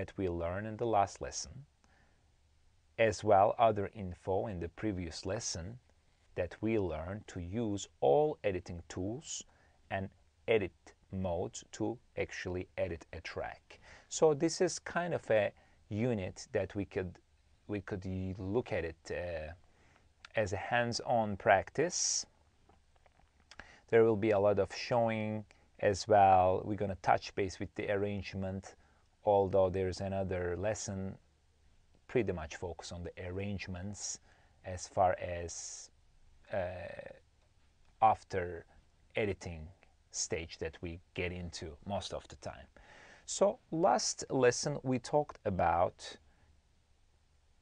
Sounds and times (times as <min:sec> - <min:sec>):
Speech: 0:00.0 - 0:01.8, 0:03.0 - 0:19.6, 0:20.2 - 0:22.3, 0:23.9 - 0:31.2, 0:32.1 - 0:37.3, 0:38.0 - 0:46.2.